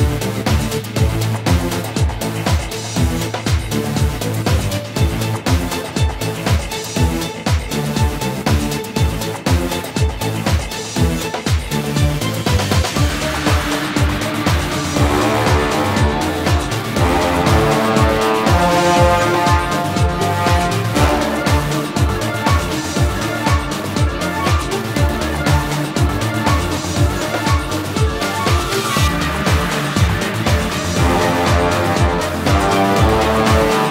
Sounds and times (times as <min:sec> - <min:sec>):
Angry music: 0:00.0 - 0:33.9.